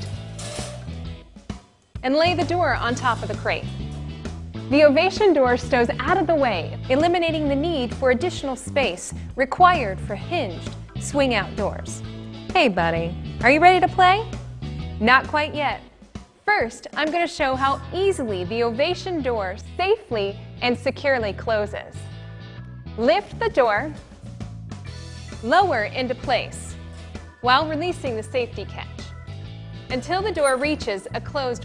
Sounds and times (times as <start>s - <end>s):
Music: 0.0s - 31.6s
Speech: 2.0s - 3.7s, 4.7s - 12.0s, 12.6s - 14.3s, 15.0s - 15.8s, 16.5s - 22.0s, 23.0s - 24.0s, 25.5s - 26.7s, 27.5s - 29.0s, 29.9s - 31.6s.